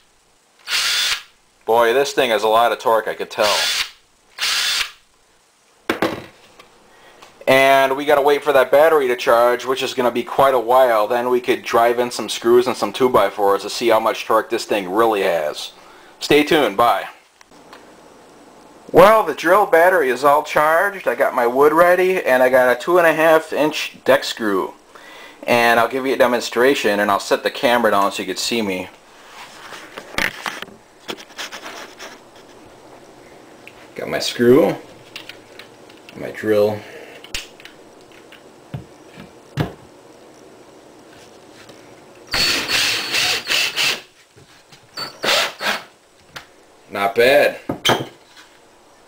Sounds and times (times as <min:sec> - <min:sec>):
Power tool: 0:00.6 - 0:01.3, 0:03.4 - 0:05.0, 0:42.3 - 0:44.1, 0:45.0 - 0:45.9.